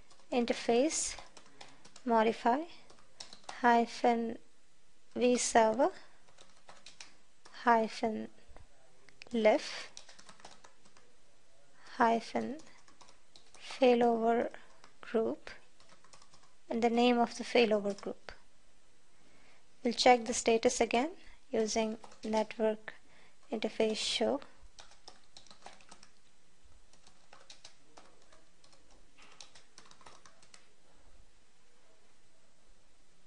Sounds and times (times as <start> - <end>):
Computer keyboard: 0.0 - 0.4, 1.0 - 2.1, 2.8 - 3.7, 6.3 - 7.7, 9.6 - 11.1, 12.3 - 13.8, 14.5 - 16.6, 17.8 - 18.4, 21.8 - 22.6, 24.7 - 26.3, 26.9 - 30.7.